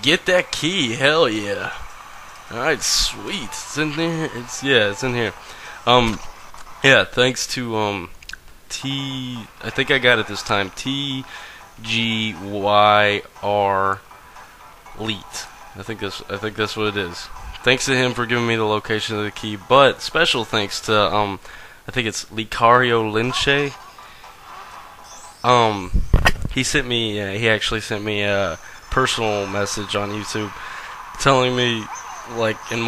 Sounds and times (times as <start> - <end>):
Speech: 0.0 - 1.8, 2.5 - 6.2, 6.8 - 8.1, 8.7 - 14.0, 15.0 - 23.8, 25.5 - 25.9, 26.5 - 32.8
Music: 0.0 - 7.1, 8.9 - 21.2, 22.8 - 25.9, 28.9 - 32.8.